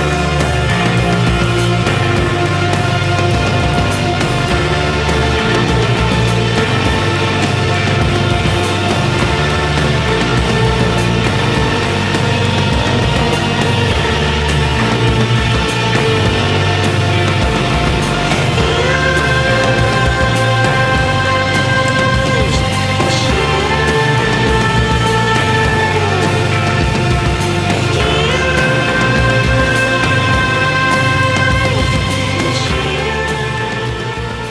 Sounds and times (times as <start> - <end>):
Music: 0.0 - 34.5.